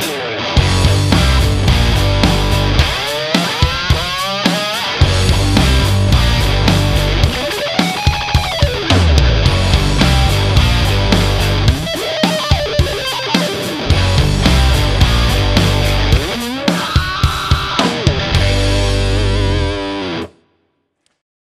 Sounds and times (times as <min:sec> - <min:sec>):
Music: 0:00.0 - 0:21.0.